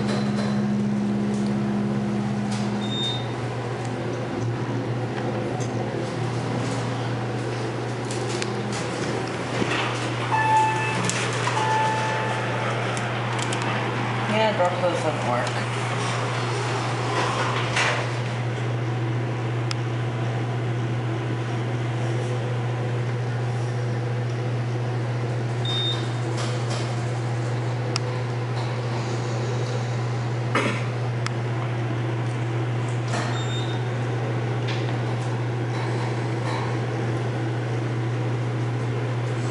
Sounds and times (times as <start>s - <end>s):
Speech: 14.3s - 15.7s.